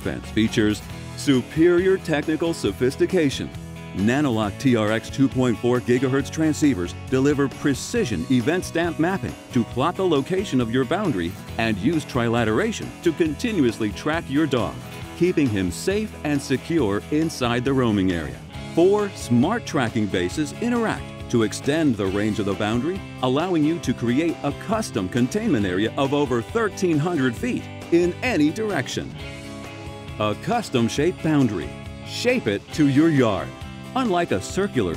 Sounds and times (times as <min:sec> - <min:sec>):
Speech: 0:00.0 - 0:29.2, 0:30.2 - 0:34.9
Music: 0:00.0 - 0:34.9.